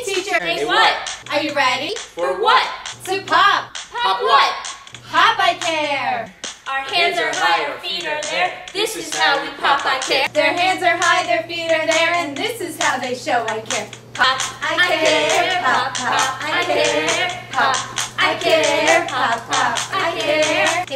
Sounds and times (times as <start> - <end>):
Music: 0.0 - 20.9.